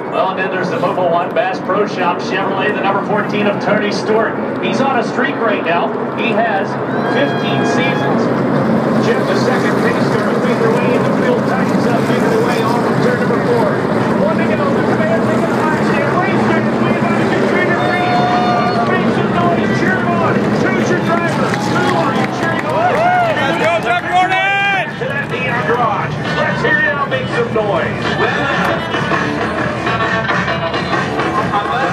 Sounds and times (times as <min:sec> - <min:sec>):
Speech: 0:00.0 - 0:08.3, 0:09.0 - 0:28.8.